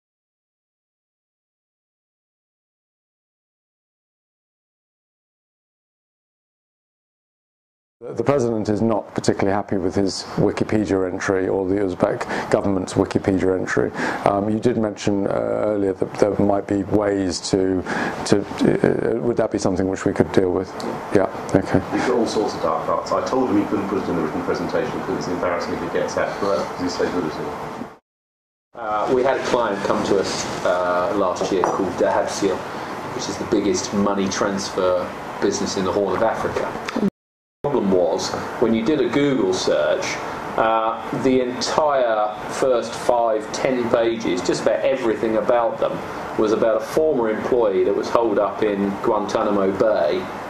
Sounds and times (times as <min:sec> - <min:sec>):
Speech: 0:08.0 - 0:27.6, 0:28.8 - 0:37.1, 0:37.7 - 0:50.3.